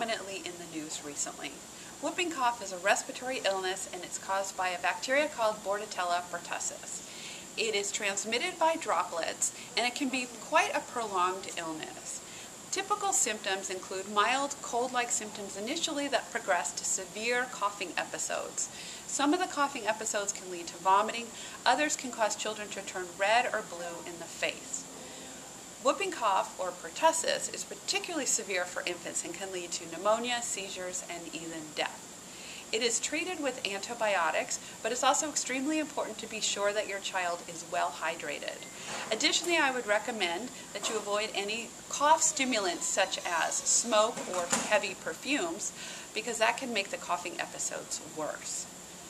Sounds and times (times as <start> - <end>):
Speech: 0.0 - 7.0, 7.6 - 24.8, 25.8 - 32.0, 32.8 - 48.7.